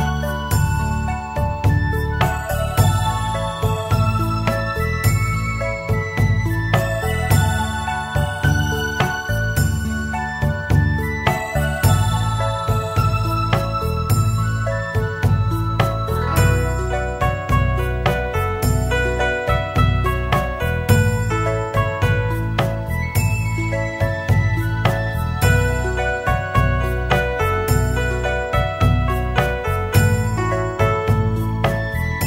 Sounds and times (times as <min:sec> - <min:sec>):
Music: 0:00.0 - 0:32.2.